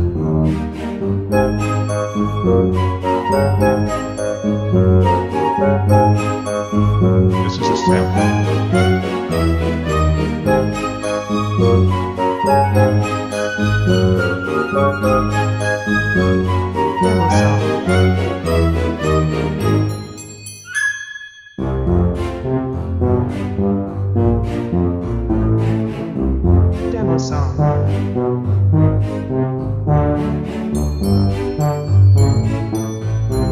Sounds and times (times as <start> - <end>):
Music: 0.0 - 33.5.